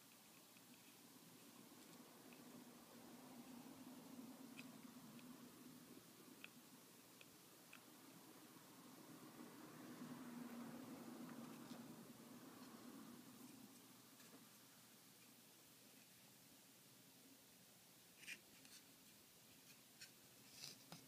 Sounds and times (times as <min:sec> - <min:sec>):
Silence: 0:00.0 - 0:21.0.